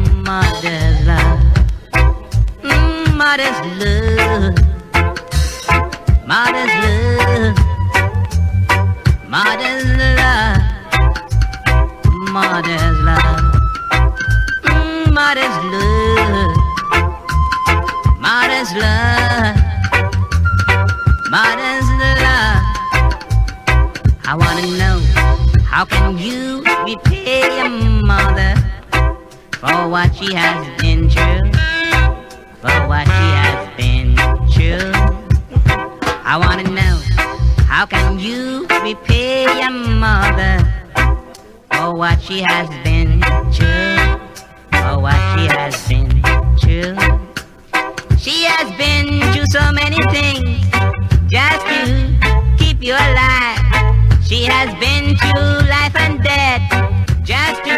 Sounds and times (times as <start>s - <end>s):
Reggae: 0.0s - 57.7s.